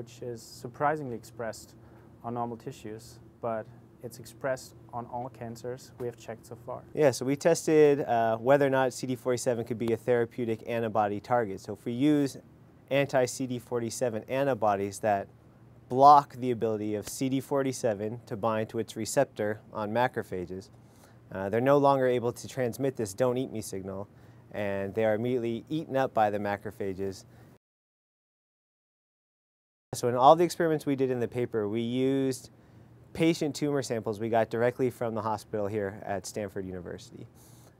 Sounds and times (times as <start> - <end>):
Speech: 0.0 - 15.3, 15.9 - 20.7, 21.3 - 27.3, 30.0 - 32.5, 33.1 - 37.3.